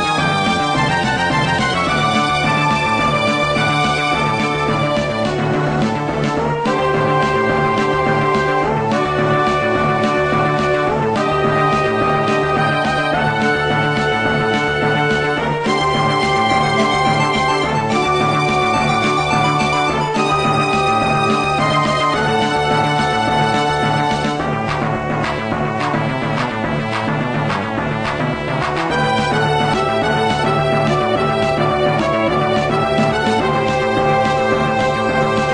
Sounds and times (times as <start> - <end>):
Theme music: 0.0 - 35.5
Video game music: 0.0 - 35.5.